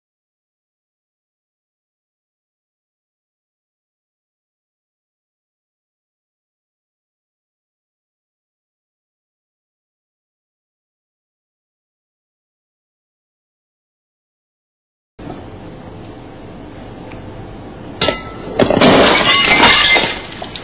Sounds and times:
Breaking: 18.0 - 20.6.

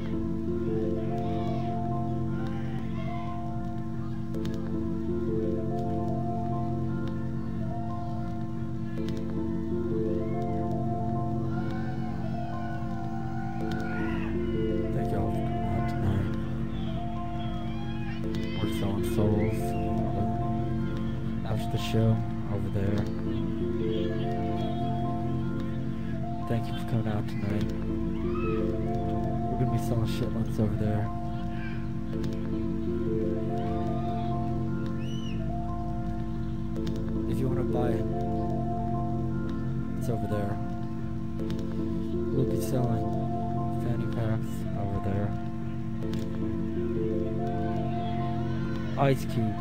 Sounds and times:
Music: 0.0 - 49.6
Speech: 18.4 - 20.4, 21.4 - 23.2, 26.4 - 27.7, 49.0 - 49.6.

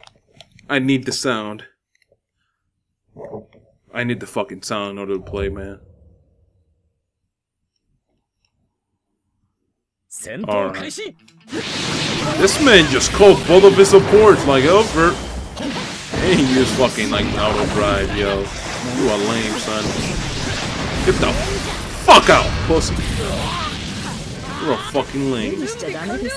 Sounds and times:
Speech: 0.7 - 1.8, 16.2 - 20.0.

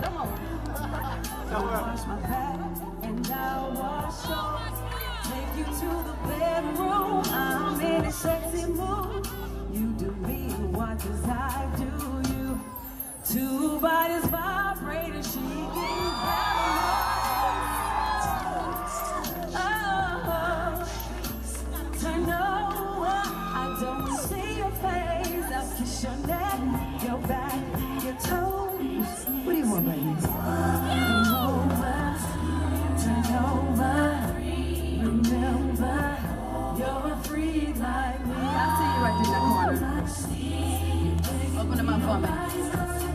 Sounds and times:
Music: 0.0 - 43.1.

